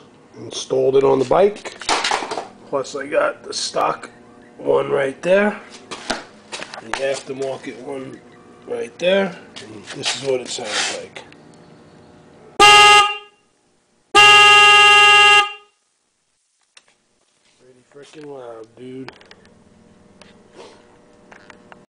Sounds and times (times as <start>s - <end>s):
Speech: 0.4s - 1.6s, 2.7s - 5.7s, 6.8s - 11.3s, 17.6s - 19.2s
Air horn, truck horn: 12.6s - 13.5s, 14.2s - 15.8s.